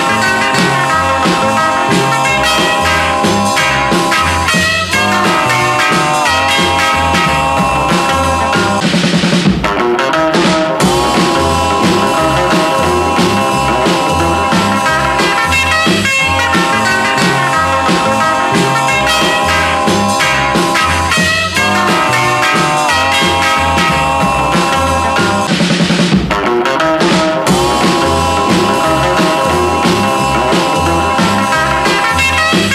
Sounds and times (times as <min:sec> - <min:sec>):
Psychedelic rock: 0:00.0 - 0:32.7.